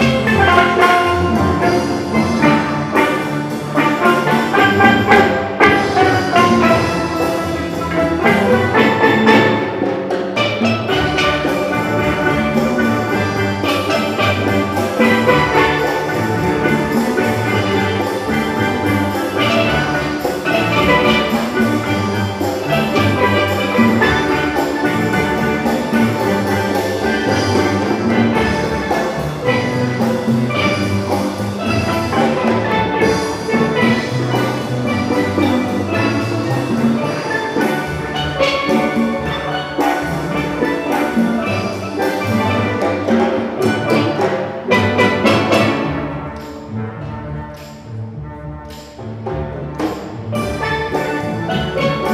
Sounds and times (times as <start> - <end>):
Drum: 0.0 - 52.1
Steelpan: 0.0 - 52.1.